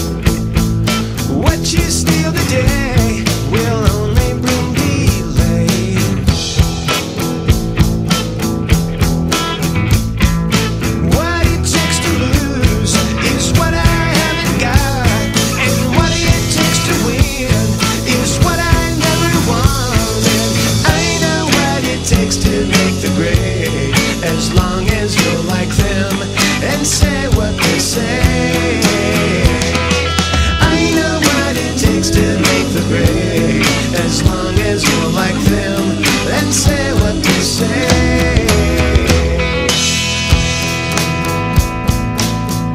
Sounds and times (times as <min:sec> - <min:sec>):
Rhythm and blues: 0:00.0 - 0:42.7.